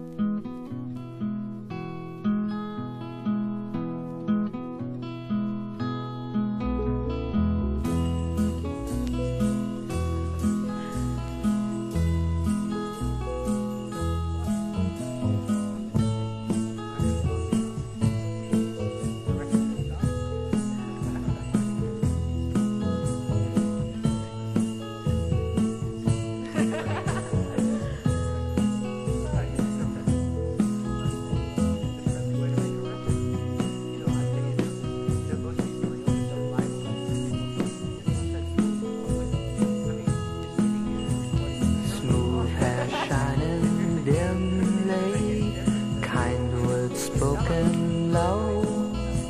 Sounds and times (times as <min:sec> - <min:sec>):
Jingle, tinkle: 0:06.6 - 0:49.2.